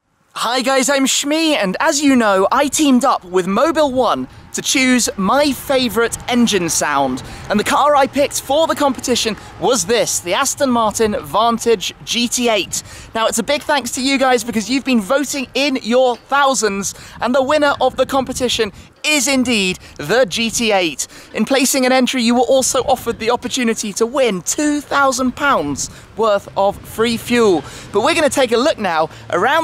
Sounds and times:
Speech: 0:00.4 - 0:29.6.

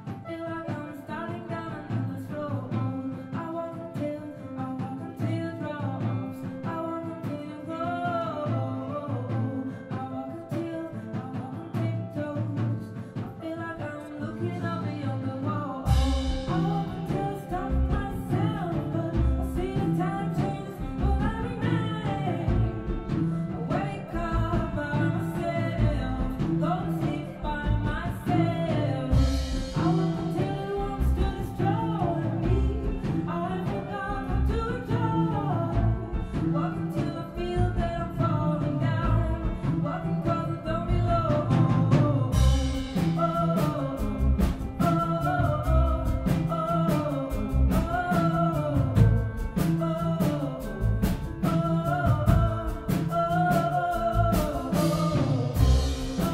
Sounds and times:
Music: 0:00.0 - 0:56.3.

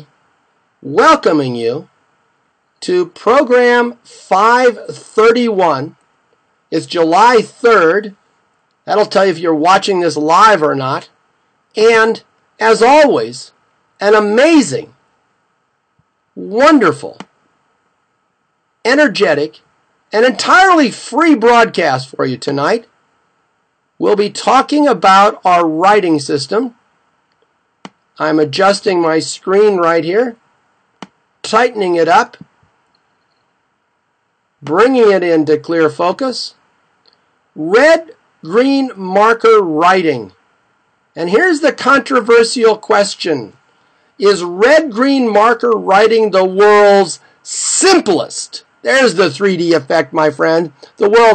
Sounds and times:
Speech: 0:00.8 - 0:01.9, 0:02.8 - 0:06.0, 0:06.7 - 0:08.2, 0:08.8 - 0:11.2, 0:11.8 - 0:15.0, 0:16.4 - 0:17.3, 0:18.8 - 0:22.9, 0:24.0 - 0:26.8, 0:28.2 - 0:30.4, 0:31.4 - 0:32.5, 0:34.6 - 0:36.6, 0:37.6 - 0:40.4, 0:41.2 - 0:43.6, 0:44.2 - 0:51.3.

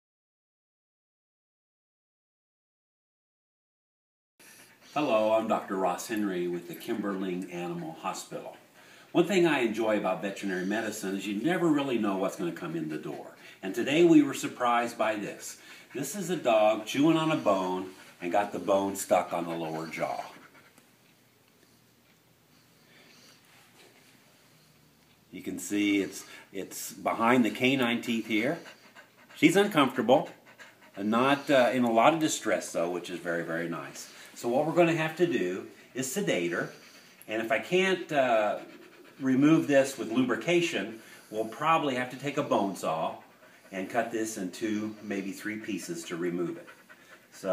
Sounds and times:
Pant: 0:04.4 - 0:05.4, 0:06.2 - 0:09.2, 0:13.3 - 0:20.8, 0:25.9 - 0:34.4, 0:35.2 - 0:47.5
Speech: 0:05.0 - 0:20.4, 0:25.3 - 0:28.7, 0:29.4 - 0:30.4, 0:31.0 - 0:46.7.

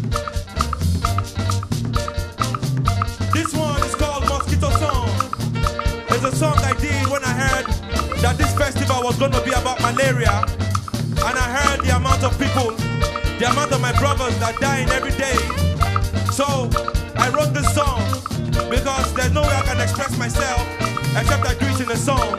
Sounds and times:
Music: 0:00.0 - 0:22.3
Speech: 0:03.4 - 0:05.3, 0:06.1 - 0:10.5, 0:11.2 - 0:12.8, 0:13.4 - 0:15.6, 0:16.3 - 0:22.3.

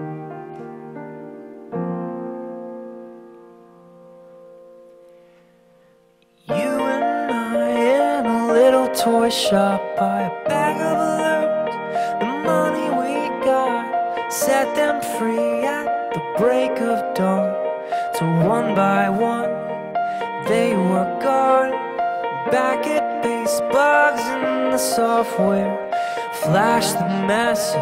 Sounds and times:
Music: 0:00.0 - 0:27.8.

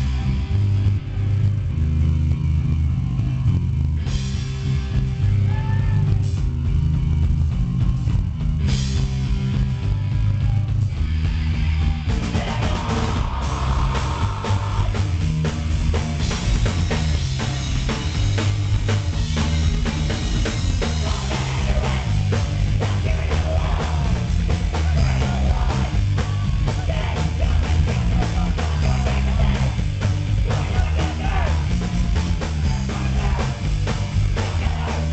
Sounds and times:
Music: 0:00.0 - 0:35.1.

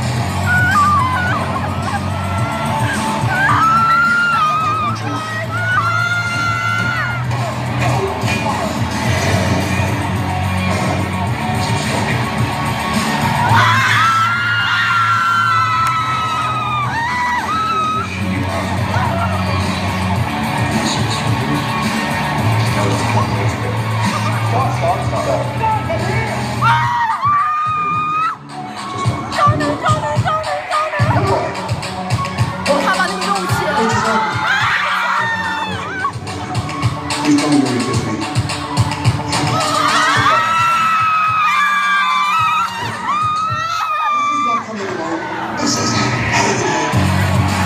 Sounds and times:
Inside, large room or hall: 0:00.0 - 0:47.6
Music: 0:00.0 - 0:47.6.

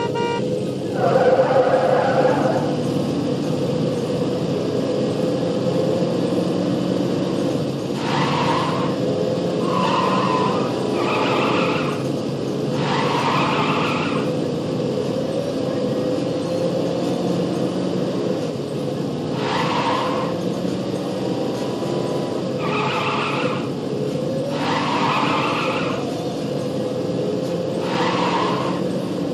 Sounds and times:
Skidding: 0:00.0 - 0:29.3.

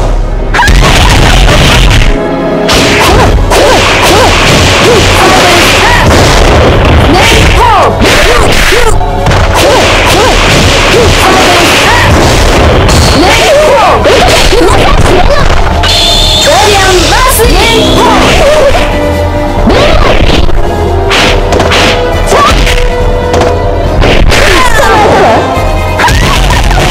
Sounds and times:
Whip: 0:21.1 - 0:22.8.

